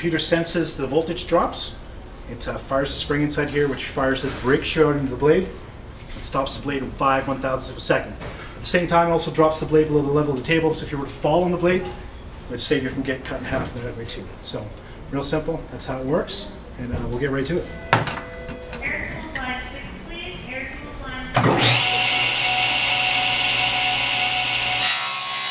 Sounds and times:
Speech: 18.8 - 21.4.

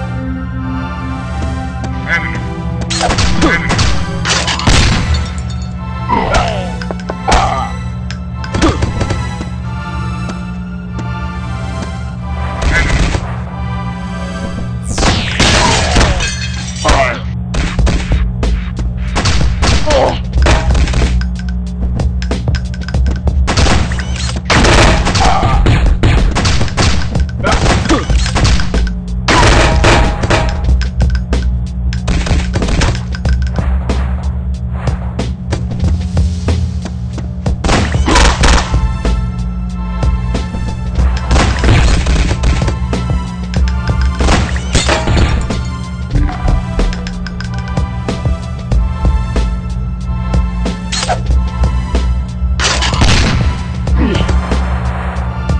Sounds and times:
Music: 0.0 - 55.5.

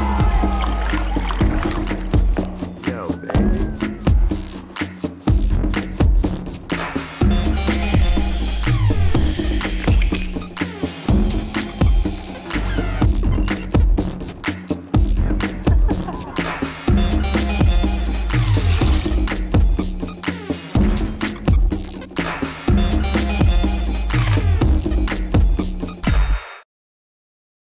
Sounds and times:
Music: 0.0 - 26.7.

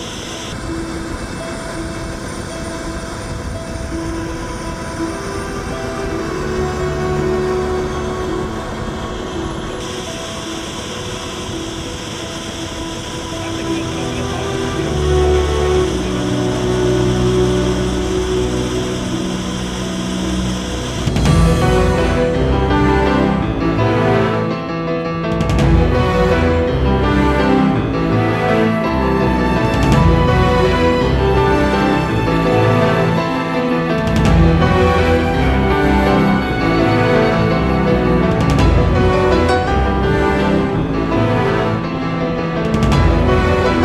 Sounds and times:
Music: 0.0 - 43.8.

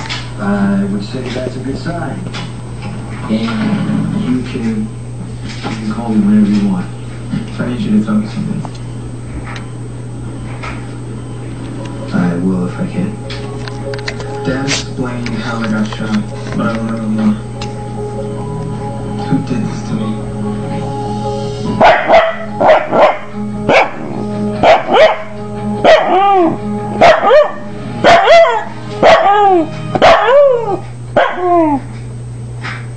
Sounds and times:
Music: 11.2 - 31.1
Bow-wow: 21.8 - 24.0, 24.6 - 25.3, 25.9 - 31.8.

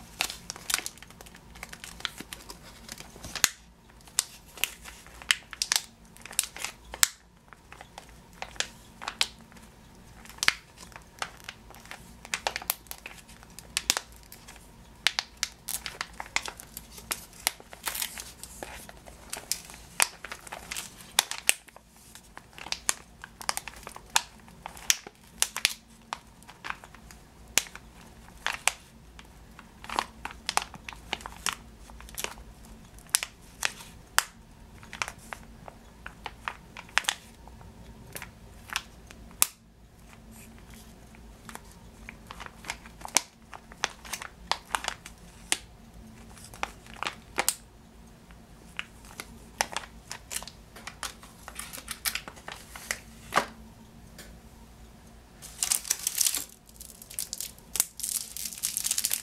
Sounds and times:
Crumpling, crinkling: 0.0 - 47.7, 48.3 - 53.6, 55.4 - 59.2
Inside, small room: 0.0 - 59.2.

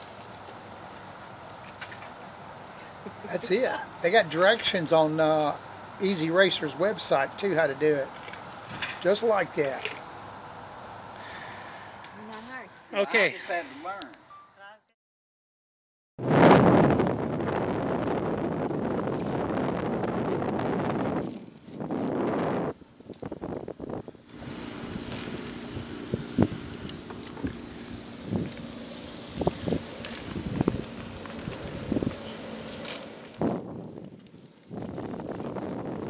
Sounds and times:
Bicycle: 0.0 - 12.6, 17.1 - 36.1
Outside, urban or manmade: 0.0 - 15.0, 16.2 - 36.1.

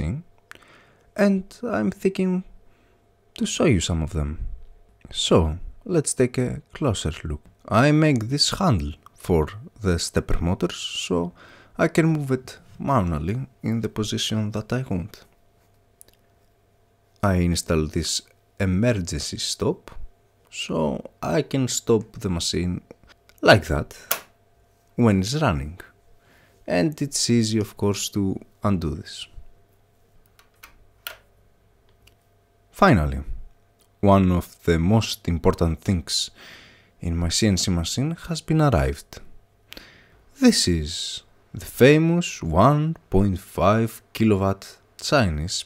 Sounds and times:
Speech: 0.0 - 0.3, 1.2 - 2.5, 3.4 - 15.3, 17.2 - 24.1, 25.0 - 26.0, 26.7 - 29.4, 32.8 - 36.4, 37.0 - 39.3, 40.4 - 45.6.

